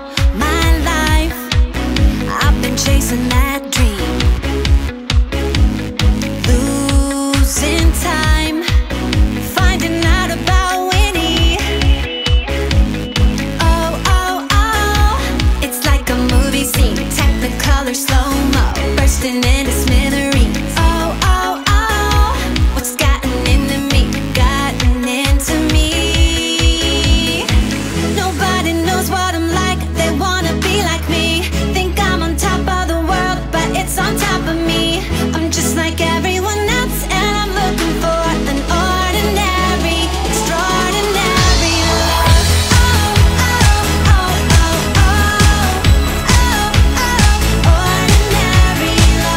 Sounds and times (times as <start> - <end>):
Music: 0.0 - 49.3.